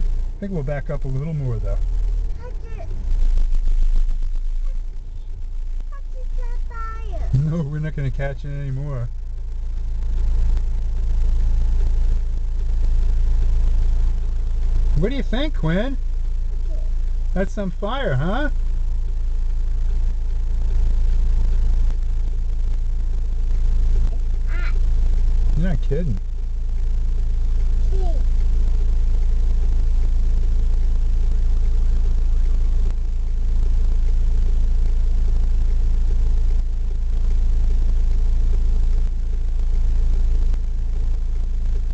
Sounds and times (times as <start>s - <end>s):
Speech: 0.4s - 1.8s, 6.0s - 9.1s, 15.0s - 16.0s, 16.7s - 18.6s, 25.6s - 26.2s.